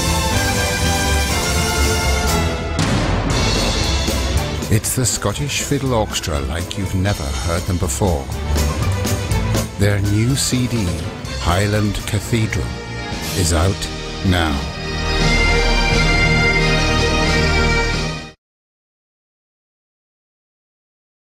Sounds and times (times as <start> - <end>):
Orchestra: 0.0 - 18.4.